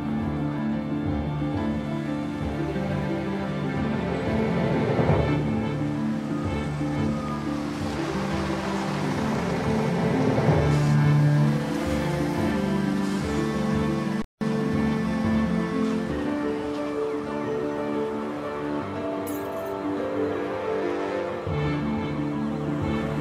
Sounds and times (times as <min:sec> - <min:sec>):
Music: 0:00.0 - 0:23.2.